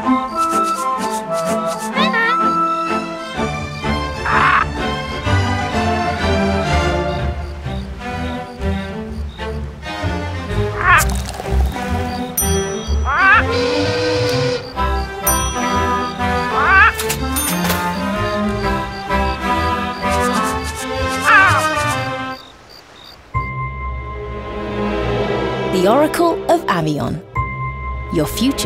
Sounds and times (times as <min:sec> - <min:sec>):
Music: 0:00.0 - 0:22.4, 0:23.4 - 0:28.6.